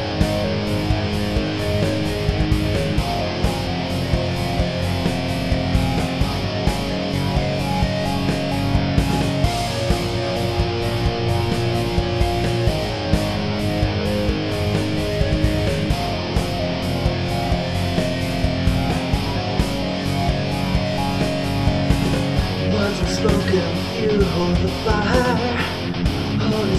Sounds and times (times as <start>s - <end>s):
Progressive rock: 0.0s - 26.7s.